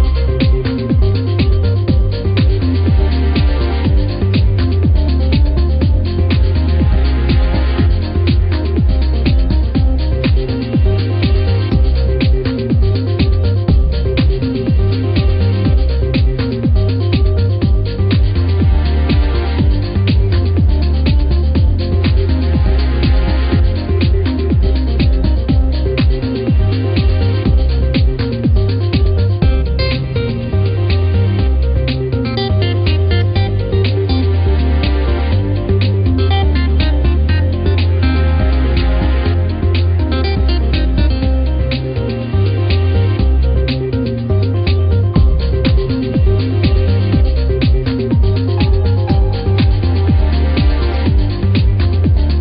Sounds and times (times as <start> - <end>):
Music: 0.0 - 52.4.